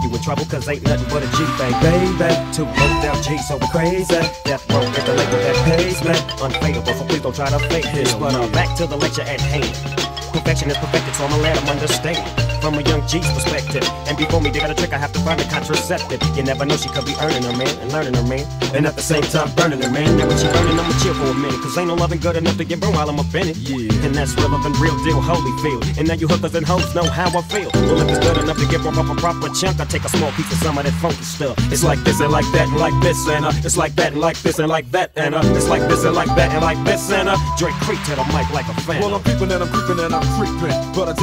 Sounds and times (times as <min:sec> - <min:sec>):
Music: 0:00.0 - 0:41.2.